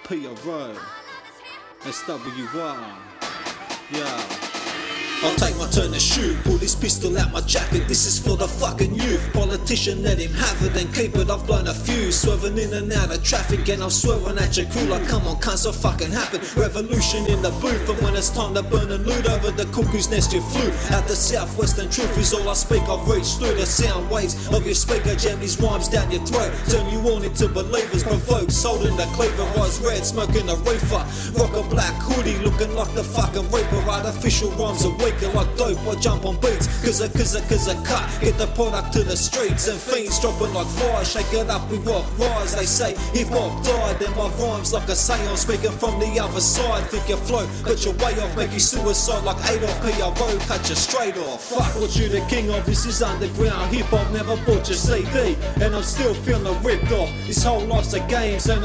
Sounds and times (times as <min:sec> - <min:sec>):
Music: 0:00.0 - 0:58.6.